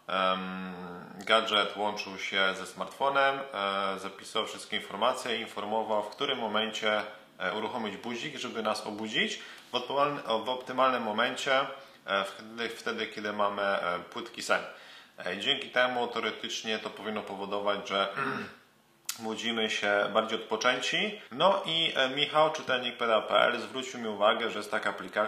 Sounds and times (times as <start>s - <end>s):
Speech: 0.0s - 18.5s, 19.1s - 25.2s.